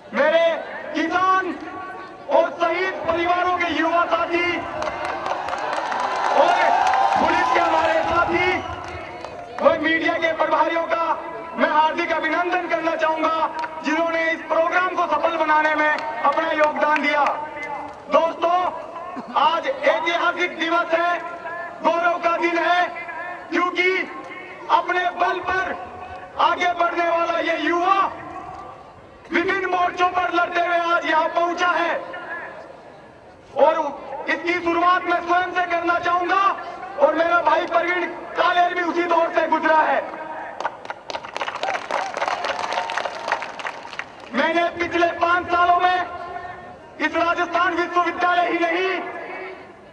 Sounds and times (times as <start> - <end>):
Male speech, man speaking: 0.0 - 4.8, 6.4 - 28.4, 29.3 - 32.7, 33.5 - 40.6, 44.3 - 49.6.